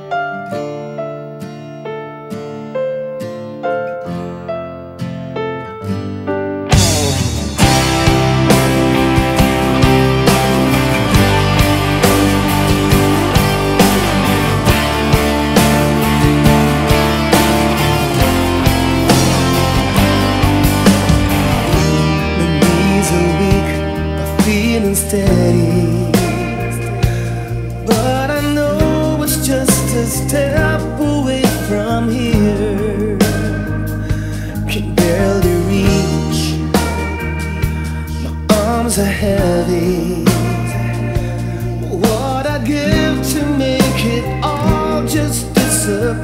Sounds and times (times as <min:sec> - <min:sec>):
Music: 0:00.0 - 0:46.2.